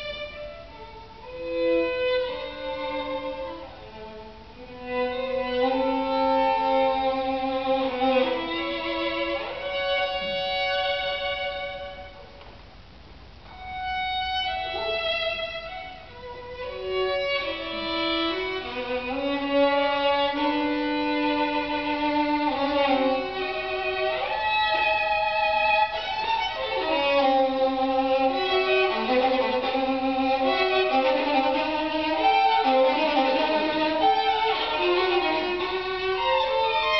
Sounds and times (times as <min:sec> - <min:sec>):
Violin, fiddle: 0:00.0 - 0:12.4, 0:13.5 - 0:37.0.